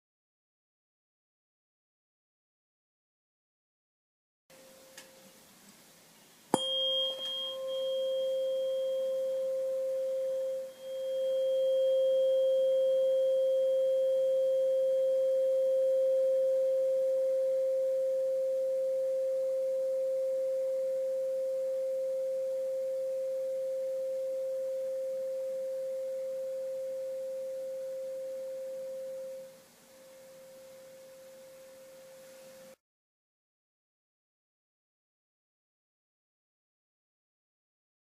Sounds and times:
Sine wave: 0:04.5 - 0:05.4, 0:06.5 - 0:32.8
Tuning fork: 0:04.5 - 0:05.4, 0:06.5 - 0:32.8.

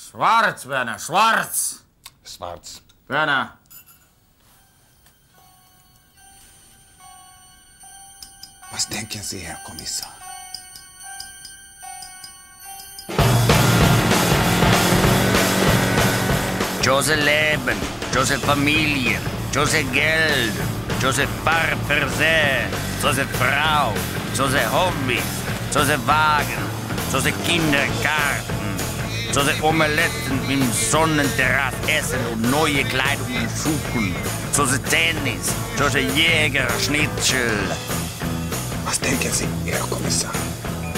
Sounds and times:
Speech: 0:00.0 - 0:03.6, 0:08.7 - 0:10.2, 0:16.8 - 0:28.4, 0:29.3 - 0:37.8, 0:38.8 - 0:40.4
Music: 0:04.4 - 0:40.9.

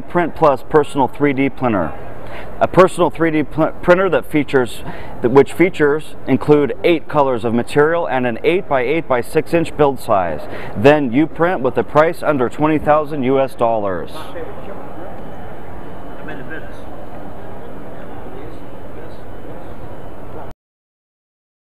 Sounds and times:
Speech: 0:00.0 - 0:02.0, 0:02.6 - 0:14.9.

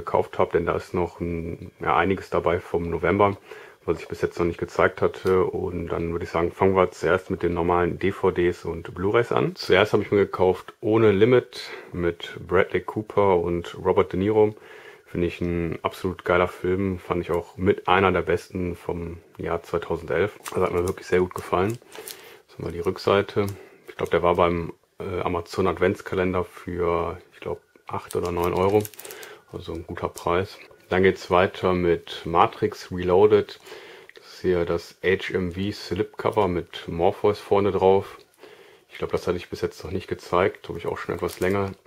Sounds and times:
Speech: 0:00.0 - 0:21.9, 0:22.5 - 0:38.3, 0:38.9 - 0:41.8.

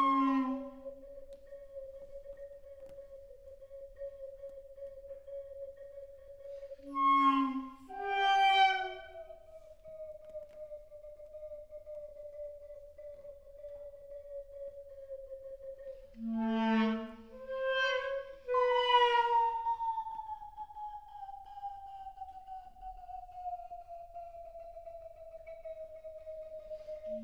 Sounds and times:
Wind instrument, woodwind instrument: 0:00.0 - 0:27.2.

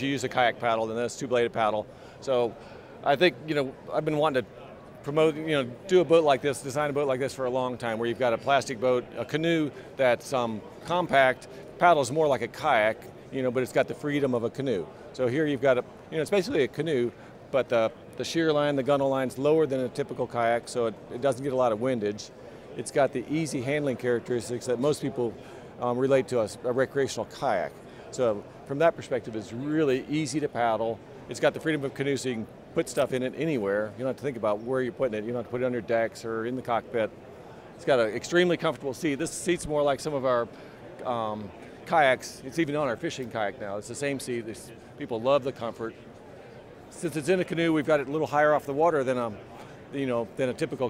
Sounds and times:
Speech: 0:00.0 - 0:37.2, 0:37.8 - 0:46.1, 0:46.9 - 0:50.8.

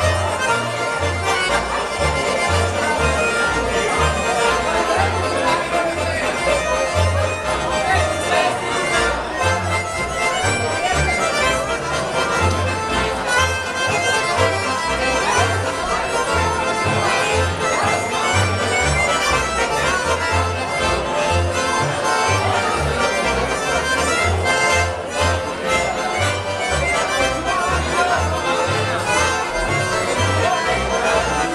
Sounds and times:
Music: 0:00.0 - 0:31.5
Speech: 0:00.0 - 0:31.5.

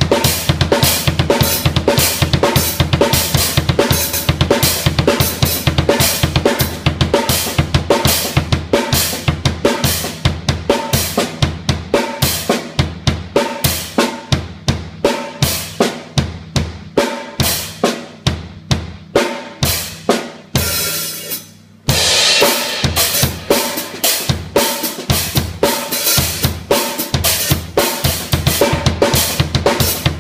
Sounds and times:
Drum: 0:00.0 - 0:30.2
Drum kit: 0:00.0 - 0:30.2.

